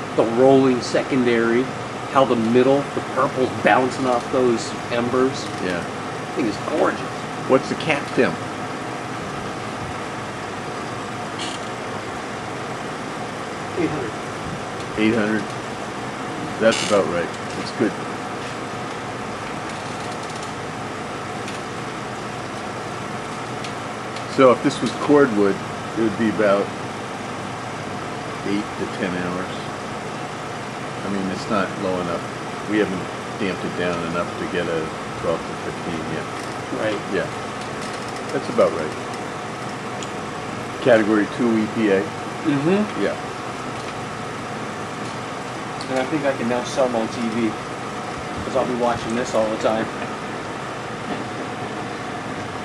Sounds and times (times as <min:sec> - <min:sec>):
Speech: 0:00.2 - 0:08.4, 0:13.8 - 0:14.2, 0:15.0 - 0:15.5, 0:16.4 - 0:18.0, 0:24.3 - 0:26.7, 0:28.4 - 0:29.7, 0:31.0 - 0:37.4, 0:38.3 - 0:39.0, 0:40.8 - 0:43.2, 0:45.8 - 0:47.6, 0:48.4 - 0:50.0.